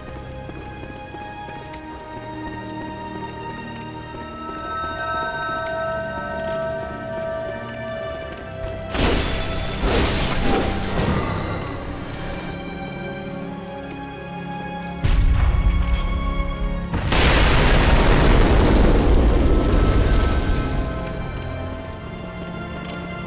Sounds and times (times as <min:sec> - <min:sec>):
Music: 0:00.0 - 0:23.2
Boom: 0:16.9 - 0:20.8.